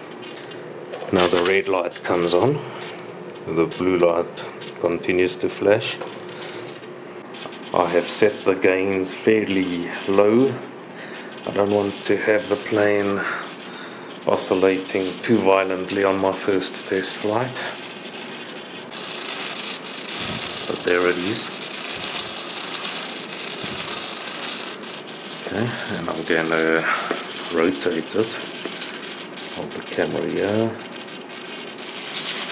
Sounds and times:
Inside, small room: 0.0s - 32.5s
Speech: 1.1s - 2.7s, 3.4s - 6.0s, 7.7s - 10.7s, 11.5s - 13.4s, 14.3s - 17.8s, 20.7s - 21.6s, 25.4s - 28.5s, 29.6s - 30.8s.

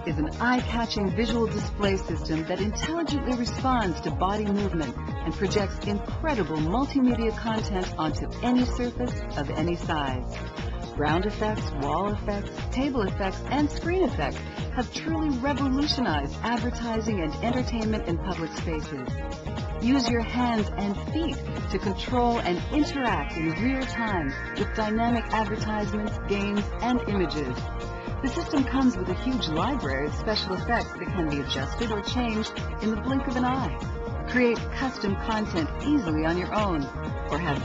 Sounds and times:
Speech: 0.0s - 10.2s, 11.0s - 19.0s, 19.8s - 27.6s, 28.2s - 37.6s
Music: 0.0s - 37.6s.

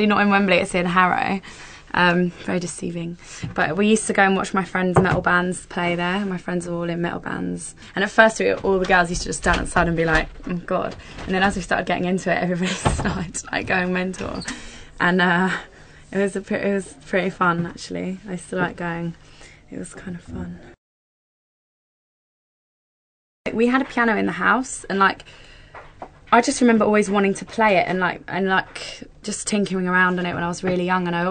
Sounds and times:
Speech: 0.0s - 20.8s, 23.5s - 25.2s, 26.3s - 31.3s.

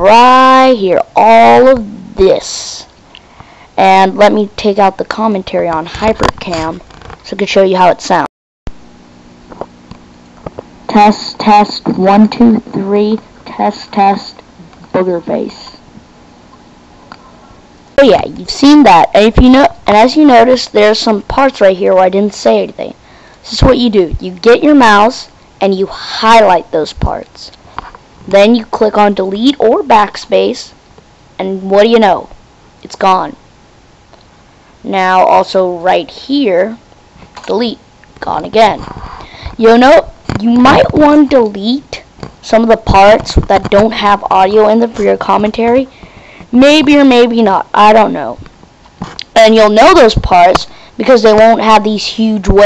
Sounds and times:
Speech: 0.0s - 2.9s, 3.8s - 8.3s, 10.9s - 15.8s, 18.0s - 27.6s, 28.2s - 30.8s, 31.4s - 33.4s, 34.8s - 36.8s, 37.4s - 48.5s, 49.2s - 52.6s.

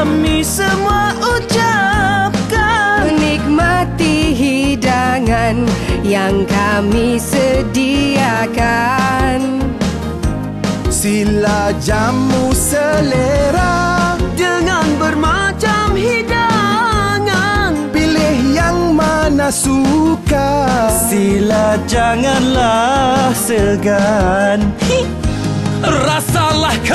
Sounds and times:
Music: 0.0s - 26.9s.

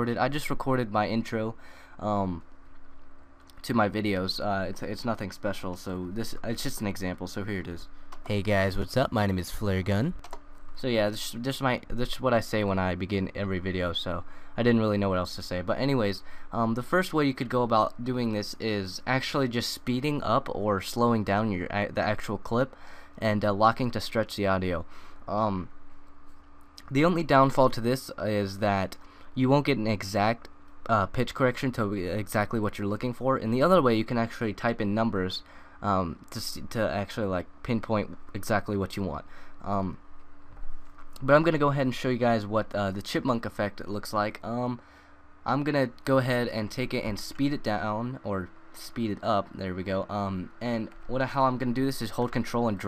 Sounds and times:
Speech: 0.0s - 2.4s, 3.5s - 10.2s, 10.8s - 25.7s, 26.8s - 40.0s, 41.2s - 44.8s, 45.5s - 52.8s.

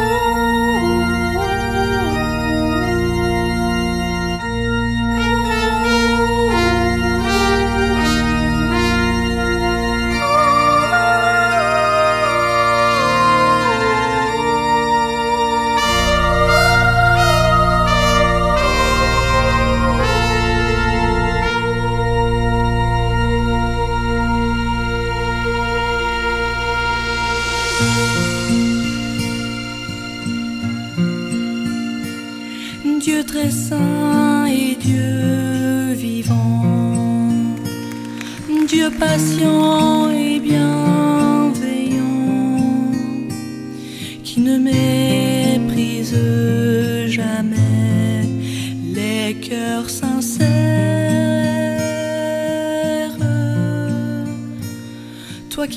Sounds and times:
Music: 0.0s - 55.7s.

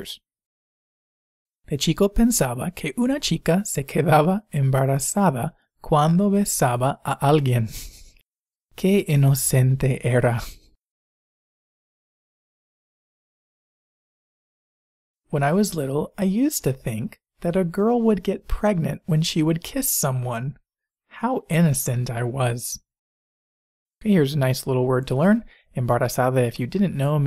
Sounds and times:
Speech: 0.0s - 0.2s, 1.7s - 7.8s, 8.8s - 10.6s, 15.3s - 20.6s, 21.2s - 22.8s, 24.0s - 27.2s.

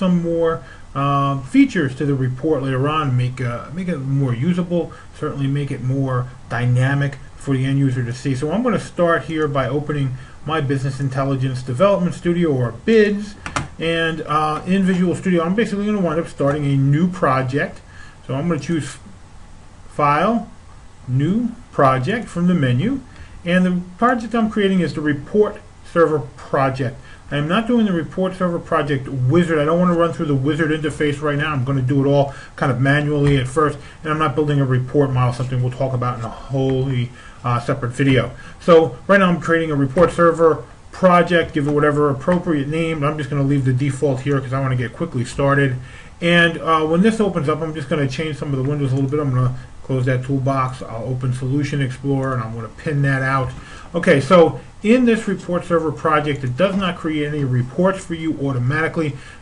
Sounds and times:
Speech: 0.0s - 19.2s, 19.9s - 59.2s.

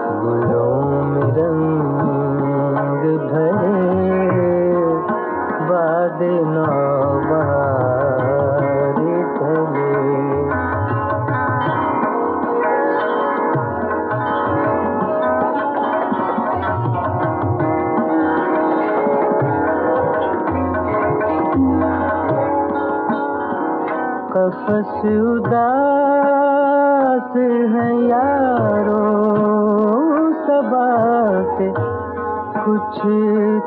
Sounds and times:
Sitar: 0.0s - 33.6s.

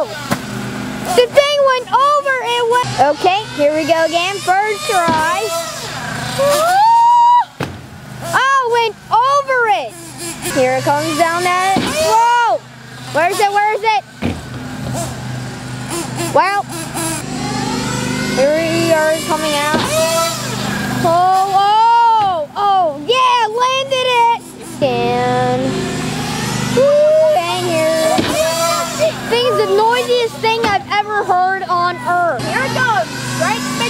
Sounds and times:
Car: 0.0s - 33.9s.

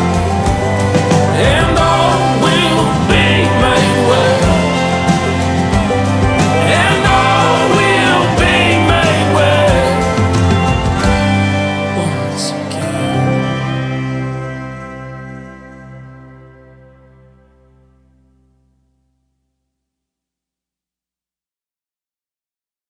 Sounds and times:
Steel guitar, slide guitar: 0.0s - 18.4s.

